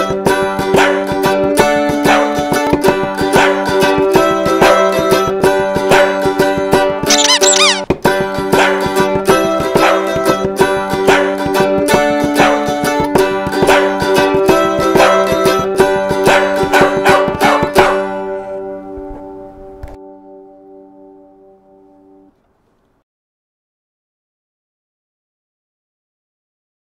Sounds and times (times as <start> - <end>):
Music: 0.0 - 22.4.